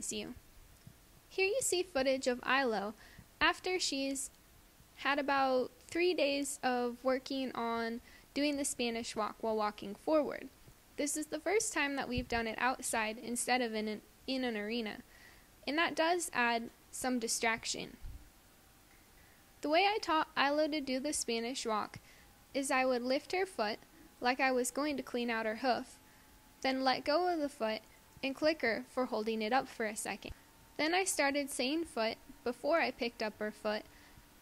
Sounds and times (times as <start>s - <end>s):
Speech: 0.0s - 0.4s, 1.4s - 4.3s, 5.0s - 15.0s, 15.7s - 18.0s, 19.6s - 22.0s, 22.6s - 26.0s, 26.6s - 33.9s.